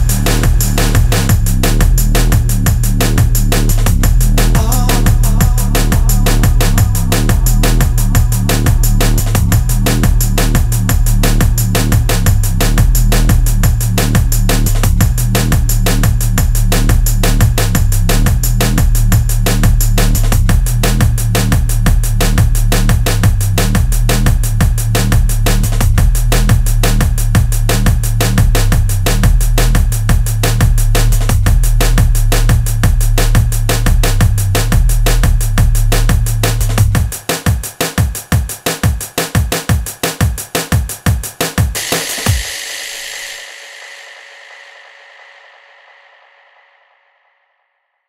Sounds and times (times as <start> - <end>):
Drum and bass: 0.0 - 44.5.